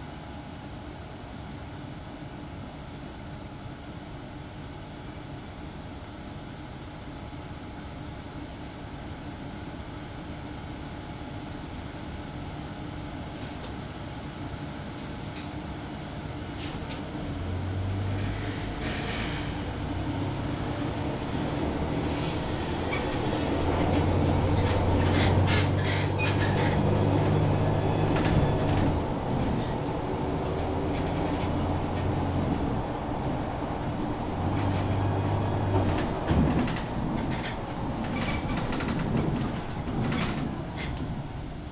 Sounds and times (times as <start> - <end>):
Bus: 0.0 - 41.7.